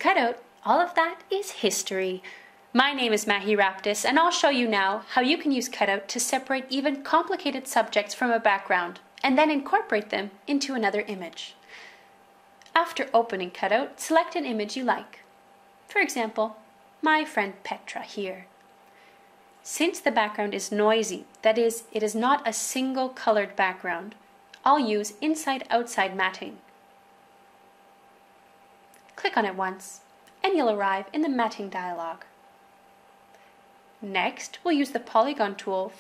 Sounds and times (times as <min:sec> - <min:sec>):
Speech: 0:00.0 - 0:11.6, 0:12.7 - 0:15.3, 0:15.9 - 0:18.5, 0:19.6 - 0:26.6, 0:29.2 - 0:32.4, 0:34.0 - 0:36.0.